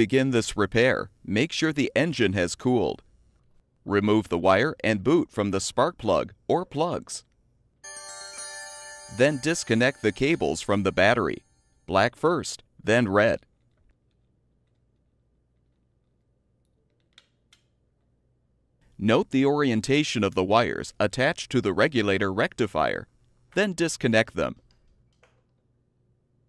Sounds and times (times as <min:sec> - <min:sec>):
Speech: 0:00.0 - 0:03.0, 0:03.9 - 0:07.2, 0:09.2 - 0:13.4, 0:19.0 - 0:24.6.